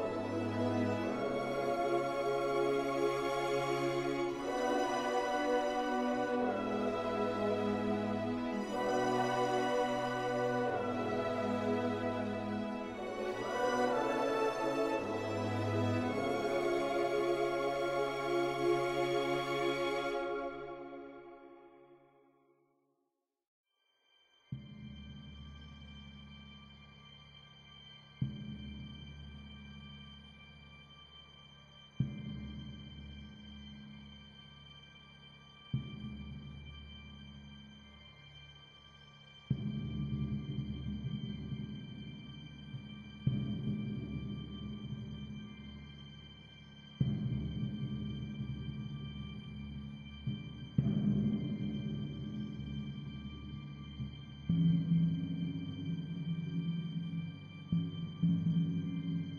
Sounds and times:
Music: 0.0 - 22.7, 23.7 - 59.3.

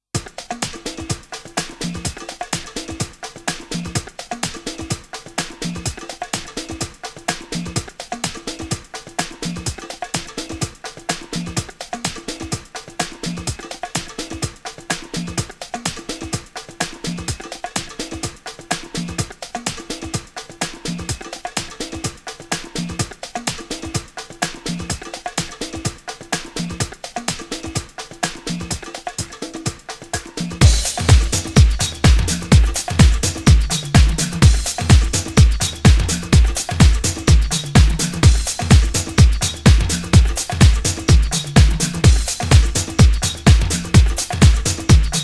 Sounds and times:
Music: 0.0 - 45.2.

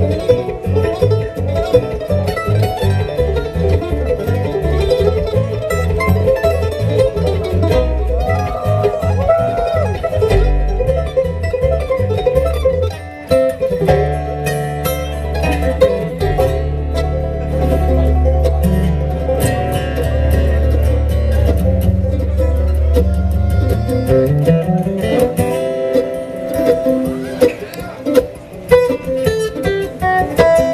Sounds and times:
Guitar: 0.0 - 30.7.

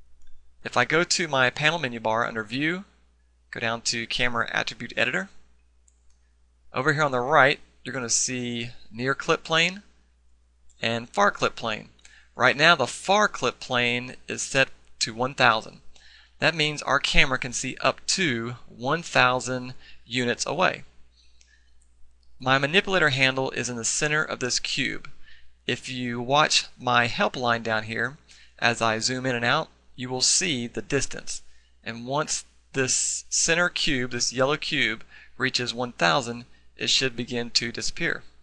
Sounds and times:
Speech: 0.6 - 5.4, 6.7 - 9.9, 10.8 - 20.9, 22.4 - 38.4.

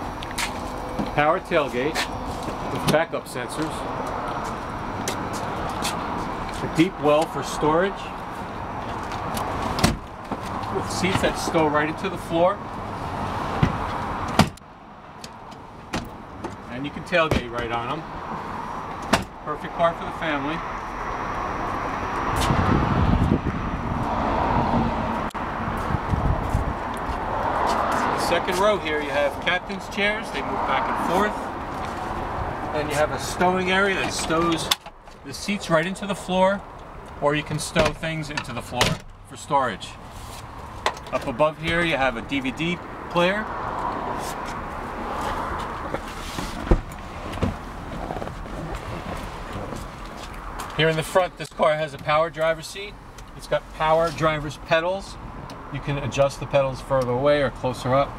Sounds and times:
Car: 0.0 - 58.1.

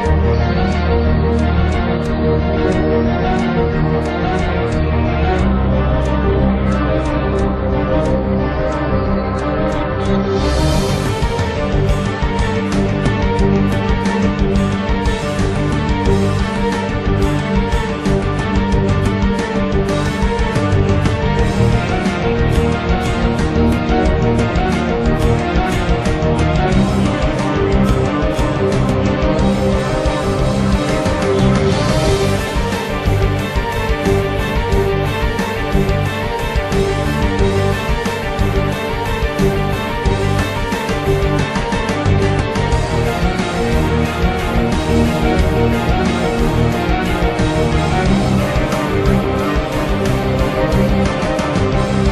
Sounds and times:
Theme music: 0.0 - 52.1.

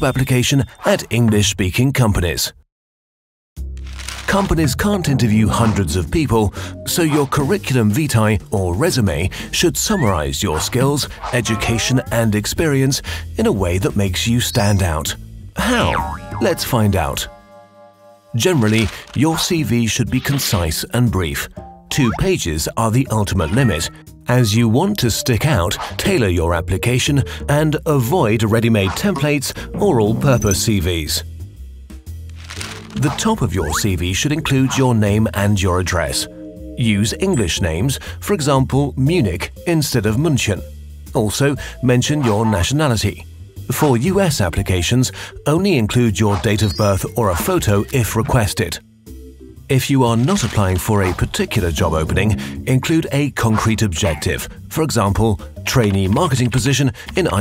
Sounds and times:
Music: 0.0 - 1.7, 3.6 - 57.4
Speech: 0.0 - 2.6, 4.3 - 17.3, 18.4 - 31.3, 33.0 - 48.8, 49.7 - 57.4.

